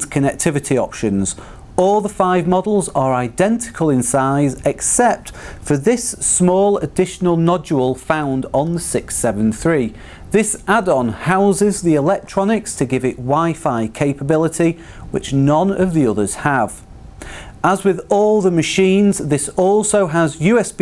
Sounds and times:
Speech: 0.0 - 16.8, 17.6 - 20.8.

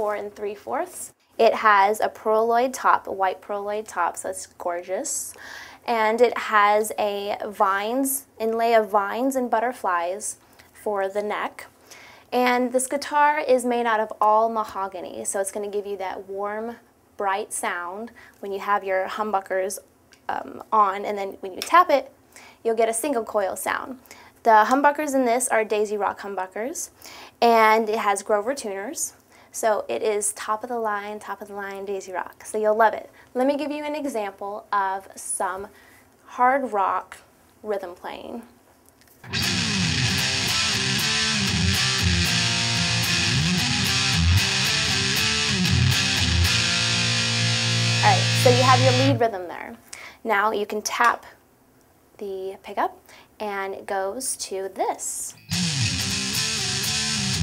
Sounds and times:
Speech: 0.0 - 11.7, 12.4 - 38.6, 48.0 - 51.4, 52.2 - 55.4.

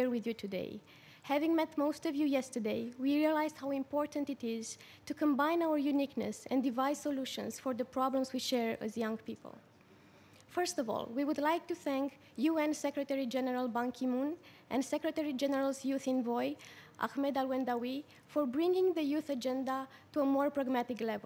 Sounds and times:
Female speech, woman speaking: 0.0 - 9.6, 10.5 - 21.2
Narration, monologue: 0.0 - 21.2.

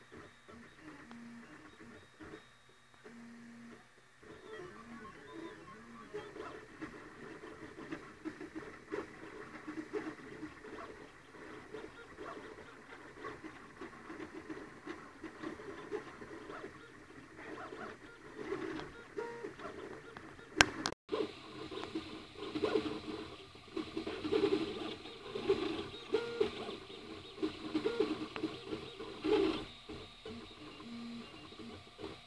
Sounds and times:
Printer: 0.0 - 32.2.

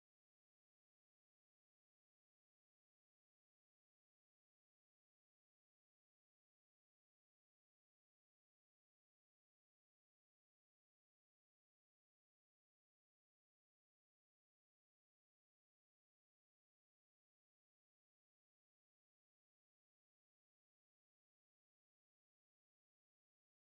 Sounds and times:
Silence: 0.0 - 23.7.

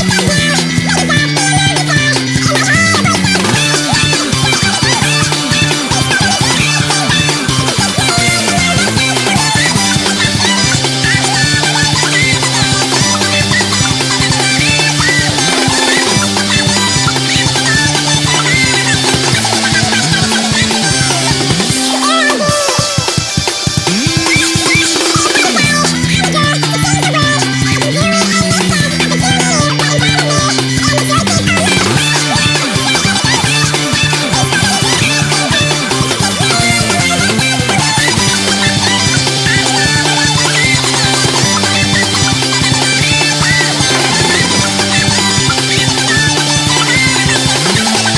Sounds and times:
Music: 0.0 - 48.1.

